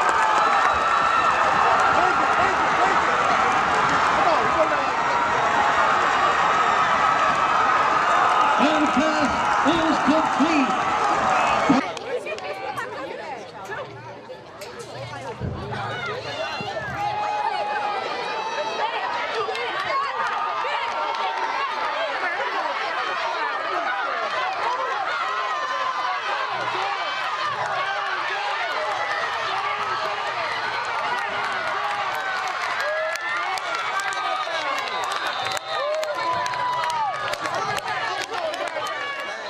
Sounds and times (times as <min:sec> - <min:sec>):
Speech: 0:08.5 - 0:10.8.